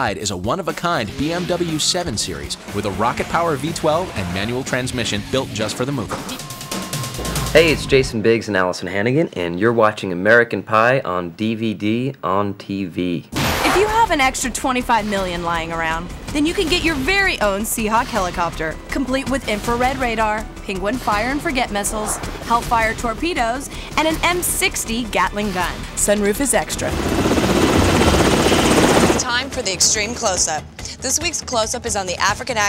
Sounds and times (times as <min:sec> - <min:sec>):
Speech: 0:00.0 - 0:06.4, 0:07.5 - 0:26.9, 0:29.2 - 0:32.6
Music: 0:00.0 - 0:08.7, 0:13.6 - 0:32.6
Helicopter: 0:22.3 - 0:30.0.